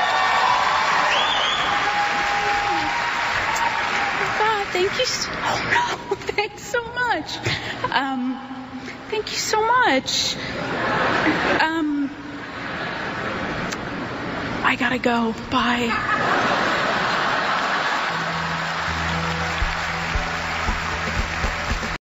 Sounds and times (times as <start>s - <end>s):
Female speech, woman speaking: 4.3s - 8.5s, 9.1s - 10.4s, 11.6s - 12.2s, 14.6s - 16.1s
Music: 18.1s - 22.0s.